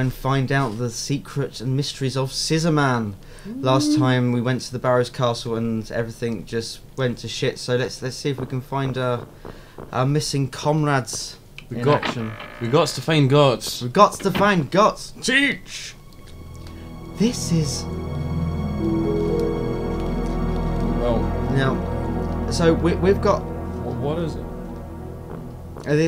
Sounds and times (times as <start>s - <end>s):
Speech: 0.0s - 9.2s, 9.9s - 16.0s, 17.2s - 17.9s, 22.5s - 24.4s, 25.9s - 26.0s
Music: 15.8s - 26.0s.